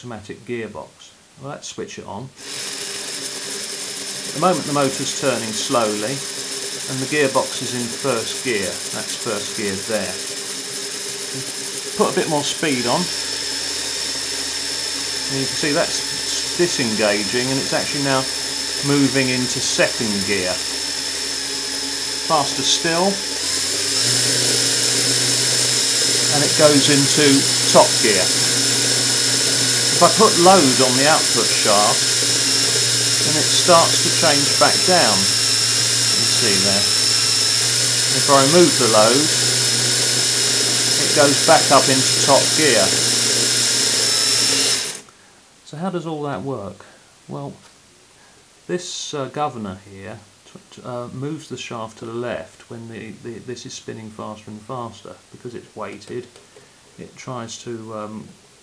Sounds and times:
Ratchet, pawl: 2.4s - 45.0s
Gears: 2.4s - 45.1s.

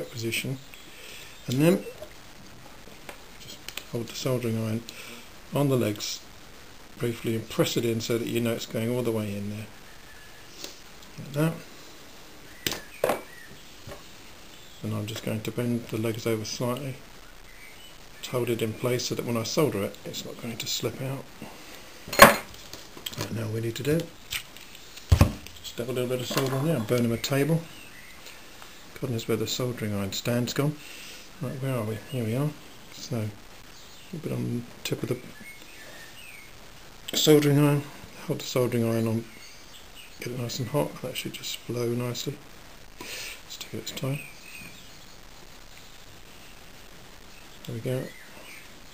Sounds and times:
Speech: 0.0s - 0.6s, 1.4s - 2.0s, 3.4s - 4.9s, 5.5s - 6.3s, 7.0s - 9.7s, 11.2s - 11.7s, 14.8s - 17.0s, 18.2s - 21.3s, 23.1s - 24.1s, 25.6s - 27.7s, 29.0s - 30.8s, 31.4s - 33.4s, 34.1s - 35.4s, 37.1s - 39.3s, 40.2s - 42.4s, 43.5s - 44.3s, 47.6s - 48.2s
Inside, small room: 0.0s - 48.9s.

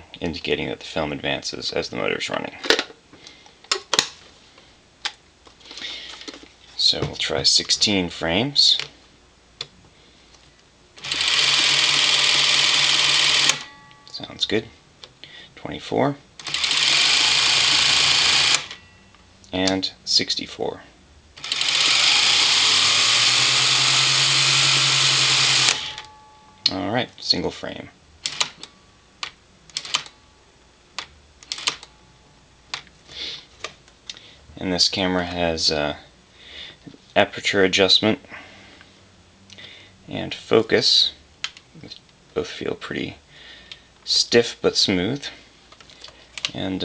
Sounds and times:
Speech: 0.2s - 2.7s, 6.8s - 8.9s, 14.1s - 14.8s, 15.6s - 16.2s, 19.5s - 21.0s, 26.7s - 28.0s, 34.6s - 36.1s, 37.2s - 38.3s, 40.1s - 41.2s, 41.8s - 43.2s, 44.1s - 45.4s, 46.5s - 46.8s.

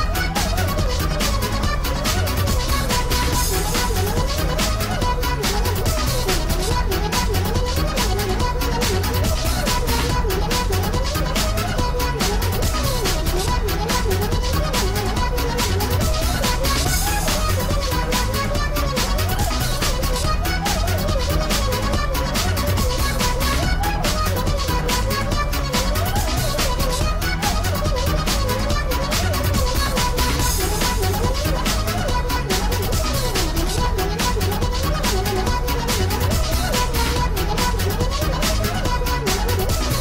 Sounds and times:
Music: 0.0s - 40.0s.

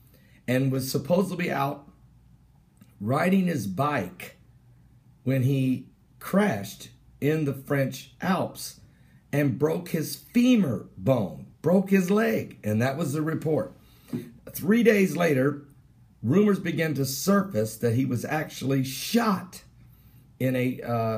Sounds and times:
Speech: 0.5s - 1.9s, 3.0s - 4.4s, 5.2s - 8.8s, 9.4s - 13.8s, 14.5s - 19.7s, 20.4s - 21.1s.

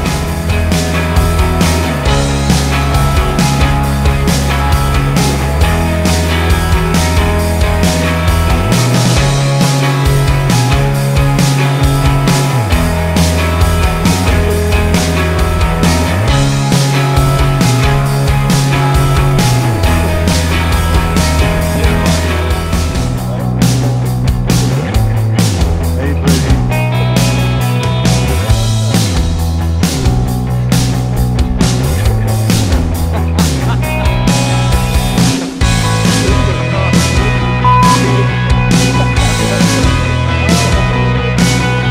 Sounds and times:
Music: 0.0s - 41.9s.

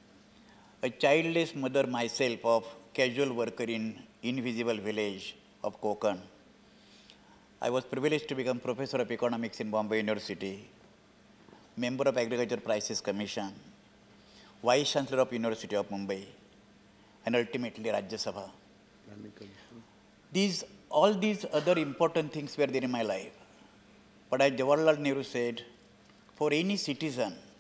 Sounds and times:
Male speech, man speaking: 0.8s - 6.4s, 7.6s - 10.7s, 11.8s - 13.6s, 14.6s - 16.4s, 17.3s - 23.4s, 24.3s - 25.8s, 26.4s - 27.5s.

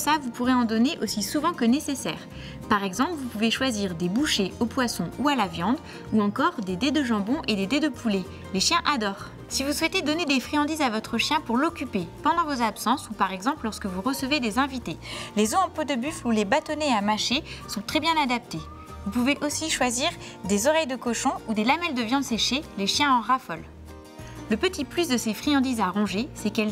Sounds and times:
Speech: 0.0s - 23.7s, 24.5s - 26.7s
Music: 0.0s - 26.7s.

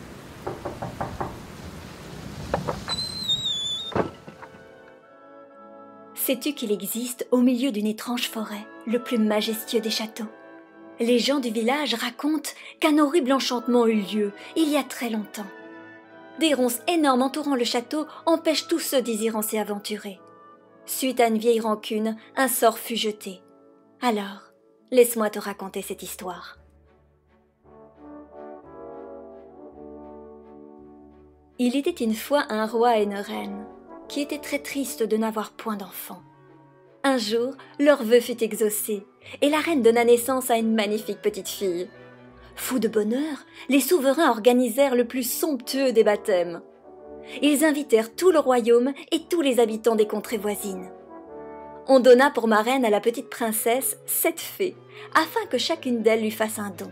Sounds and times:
Music: 3.1s - 56.9s
Speech: 6.2s - 10.3s, 11.0s - 15.5s, 16.4s - 20.2s, 20.9s - 23.4s, 24.0s - 26.6s, 31.6s - 36.2s, 37.1s - 41.9s, 42.6s - 46.6s, 47.4s - 50.9s, 51.9s - 56.9s.

